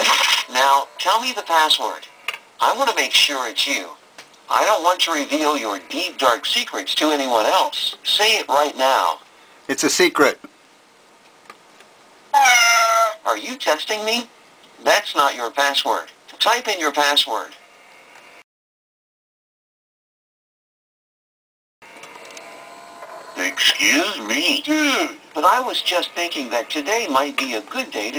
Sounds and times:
Speech: 0.0 - 10.5, 13.2 - 17.6, 23.4 - 28.1.

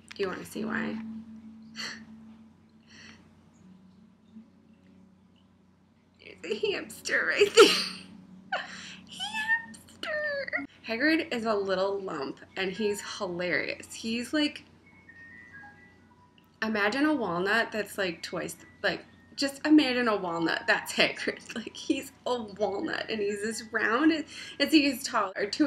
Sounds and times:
Speech: 0.1 - 1.0, 6.3 - 7.7, 9.1 - 14.6, 16.6 - 25.6.

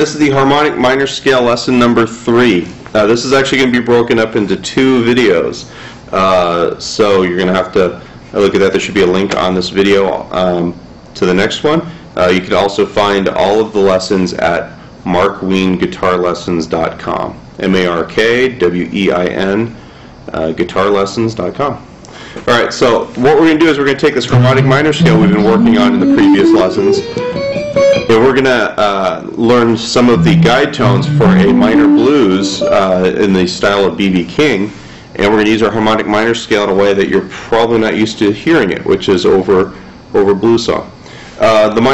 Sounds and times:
Speech: 0.0 - 27.1, 28.1 - 41.9
Music: 24.3 - 28.5, 30.1 - 33.2.

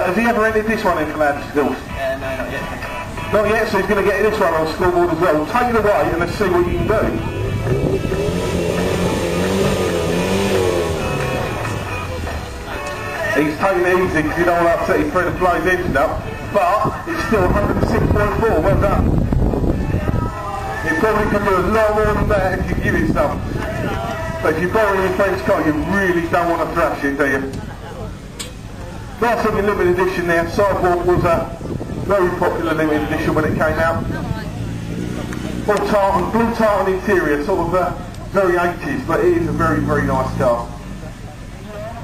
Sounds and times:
Speech: 0.0 - 7.5, 11.9 - 19.1, 20.8 - 23.4, 24.4 - 34.7, 35.4 - 42.0
Race car, auto racing: 0.0 - 42.0
Music: 1.8 - 3.8, 6.6 - 22.3, 23.4 - 26.4
Accelerating, revving, vroom: 7.3 - 12.0, 34.4 - 36.4, 39.3 - 40.7.

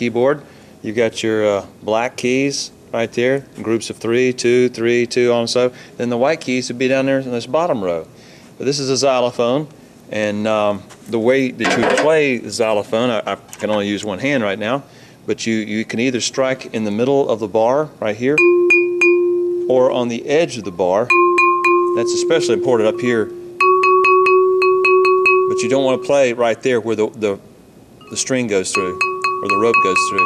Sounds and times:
Glockenspiel: 18.4 - 19.8, 21.1 - 26.4, 28.0 - 30.2.

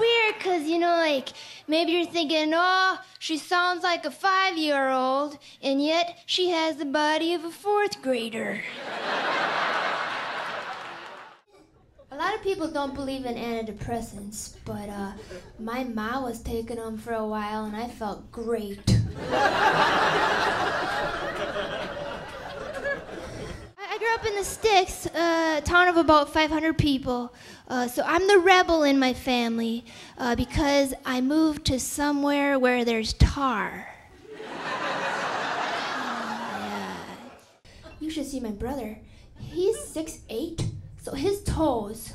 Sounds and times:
Speech: 0.0 - 8.7, 12.1 - 19.1, 23.8 - 34.0, 37.9 - 42.1.

